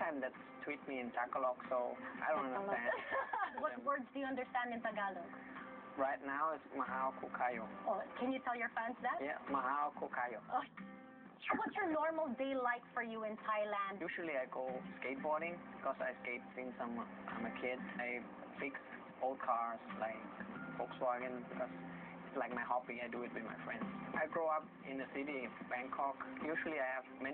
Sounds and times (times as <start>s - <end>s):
Music: 0.0s - 27.3s.